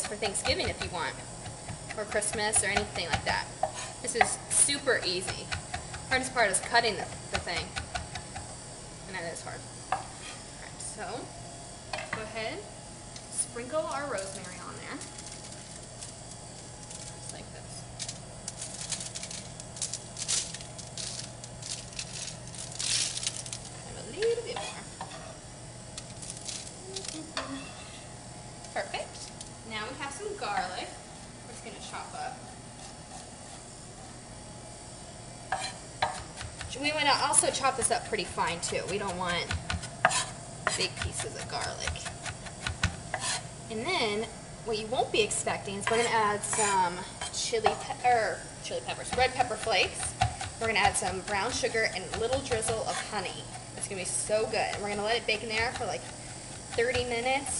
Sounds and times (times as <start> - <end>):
Frying (food): 0.0 - 57.5.